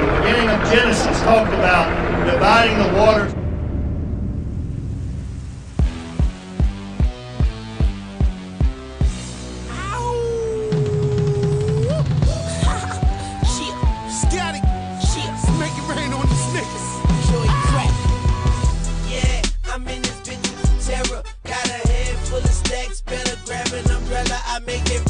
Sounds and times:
Music: 0:05.4 - 0:25.1.

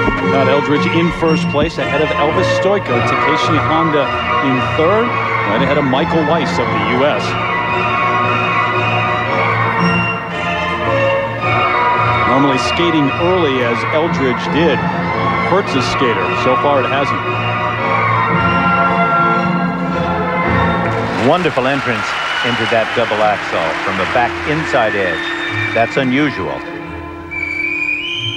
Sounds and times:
Inside, large room or hall: 0:00.0 - 0:28.3
Music: 0:00.0 - 0:28.3
Speech: 0:00.2 - 0:07.4, 0:12.3 - 0:14.8, 0:15.5 - 0:17.2, 0:21.2 - 0:25.2, 0:25.8 - 0:26.7.

